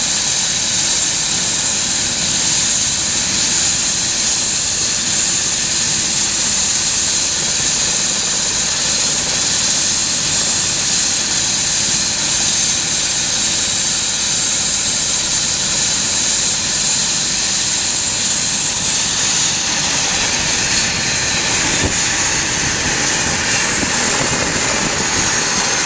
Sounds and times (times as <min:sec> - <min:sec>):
Helicopter: 0:00.0 - 0:25.8.